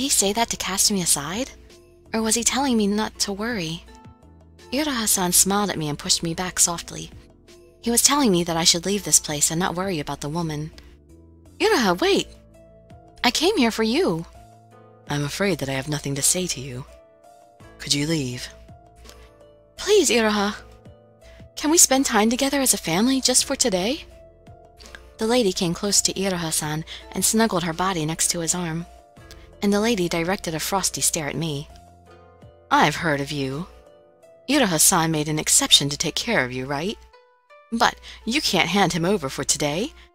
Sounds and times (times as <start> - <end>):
Music: 0.0 - 40.1
Narration, monologue: 0.0 - 40.1.